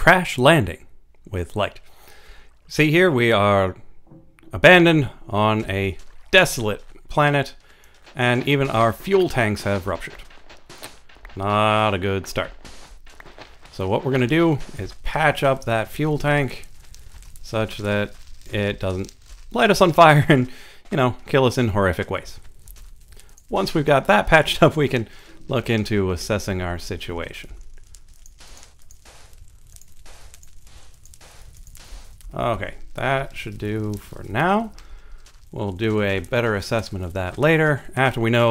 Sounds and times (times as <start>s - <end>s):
Speech: 0.0s - 1.8s, 2.7s - 3.8s, 4.5s - 7.6s, 8.2s - 10.2s, 11.4s - 12.6s, 13.7s - 16.7s, 17.4s - 22.4s, 23.5s - 27.6s, 32.3s - 34.8s, 35.5s - 38.5s.